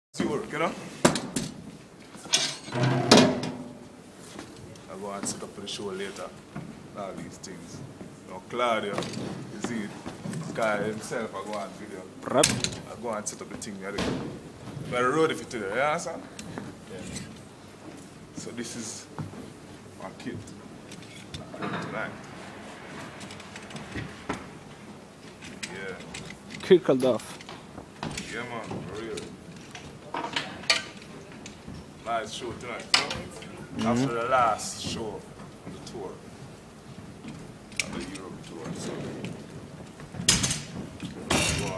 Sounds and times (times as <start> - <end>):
Speech: 0.2 - 0.8, 4.8 - 6.4, 7.0 - 14.2, 18.4 - 19.1, 20.0 - 20.5, 32.0 - 36.2, 37.8 - 39.0, 41.4 - 41.7.